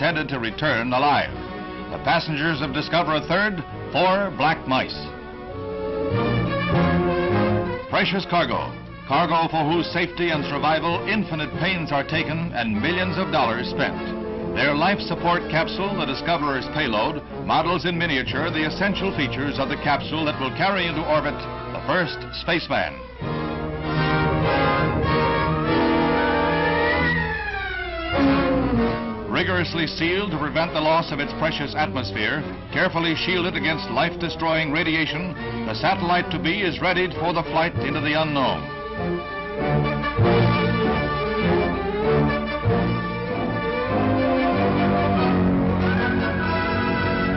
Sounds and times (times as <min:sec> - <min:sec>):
Speech: 0:00.0 - 0:01.3, 0:02.0 - 0:05.1, 0:07.9 - 0:23.0, 0:29.3 - 0:38.6
Music: 0:00.0 - 0:47.3.